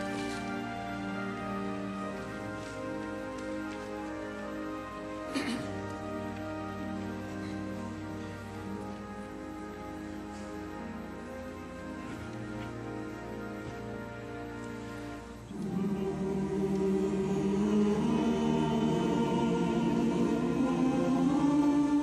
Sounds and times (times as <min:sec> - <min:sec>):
Choir: 0:15.5 - 0:22.0.